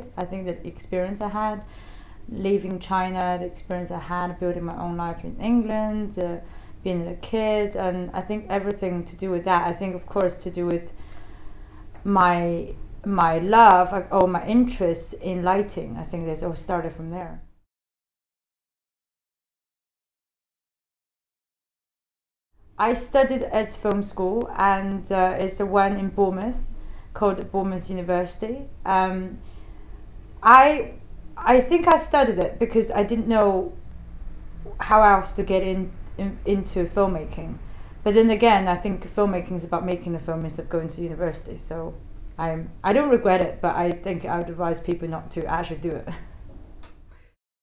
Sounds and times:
Speech: 0.0s - 1.7s, 2.3s - 11.0s, 12.0s - 17.4s, 22.8s - 29.4s, 30.4s - 33.8s, 34.7s - 46.2s.

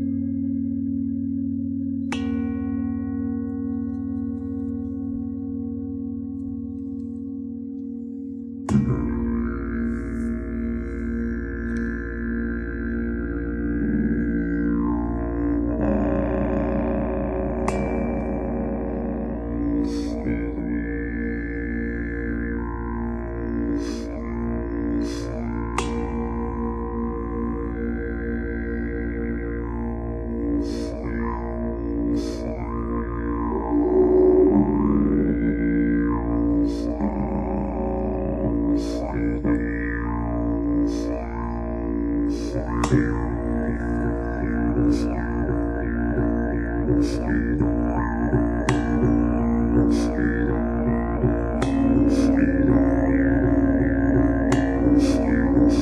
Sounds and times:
Music: 0.0s - 55.8s.

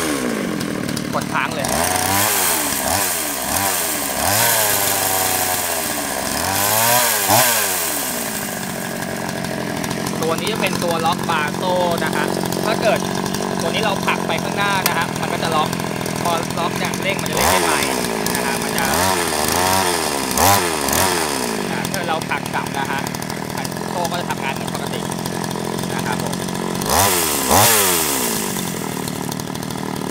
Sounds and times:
Speech: 1.1s - 1.7s, 10.2s - 13.0s, 13.6s - 19.0s, 21.7s - 25.1s, 25.9s - 26.4s.

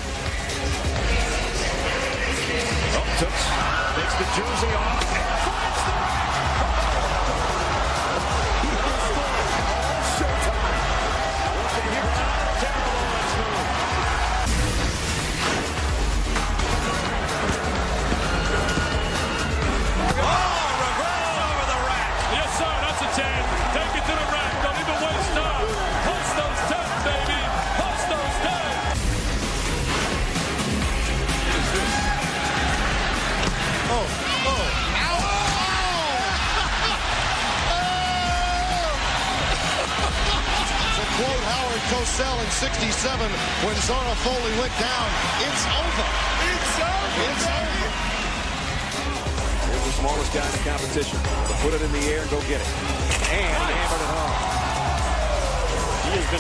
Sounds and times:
Music: 0.0s - 56.4s.

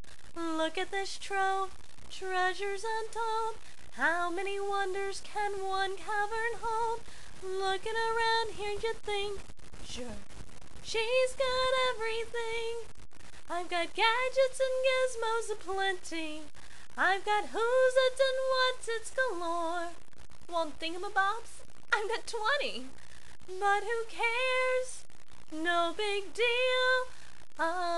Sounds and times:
Female singing: 0.4s - 10.2s, 10.9s - 12.9s, 13.5s - 22.9s, 23.5s - 27.9s.

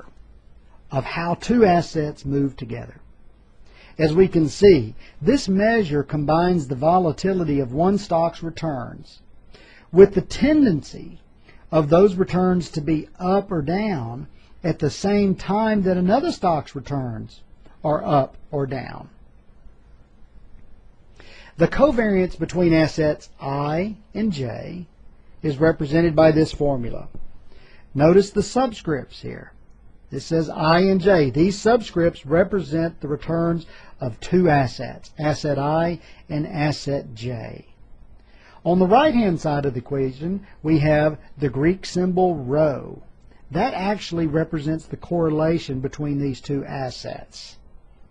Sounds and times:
Speech: 0.9s - 3.1s, 4.0s - 9.2s, 9.9s - 19.2s, 21.6s - 27.2s, 28.0s - 37.8s, 38.6s - 47.6s.

